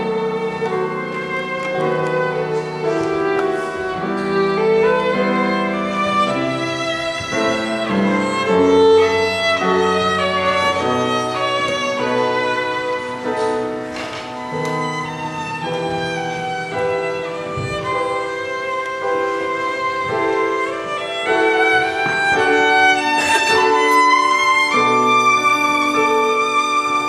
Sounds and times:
Violin, fiddle: 0.0s - 27.0s.

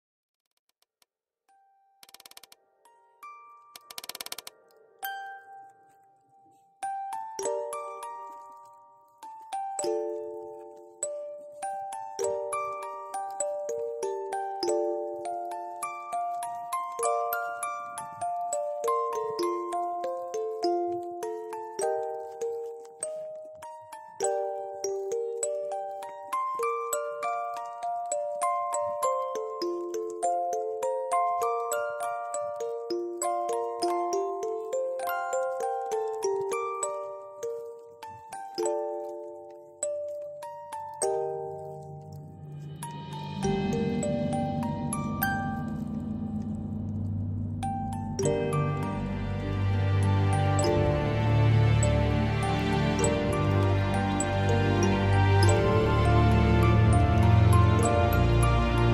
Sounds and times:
Music: 1.5s - 58.9s.

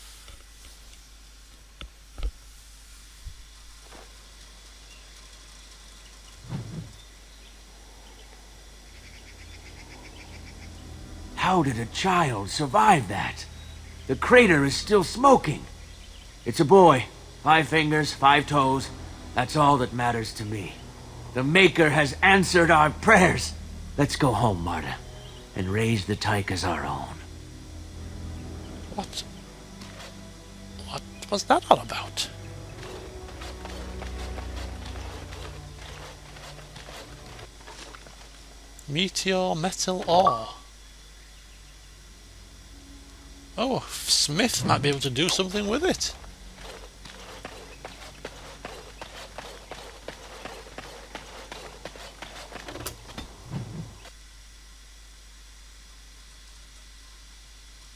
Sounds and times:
Outside, rural or natural: 0.0s - 57.9s
Music: 9.4s - 38.8s, 41.5s - 49.5s
Speech: 11.4s - 13.5s, 14.1s - 15.7s, 16.5s - 20.8s, 21.4s - 25.0s, 25.6s - 27.2s, 30.8s - 32.4s, 38.9s - 40.6s, 43.6s - 46.2s.

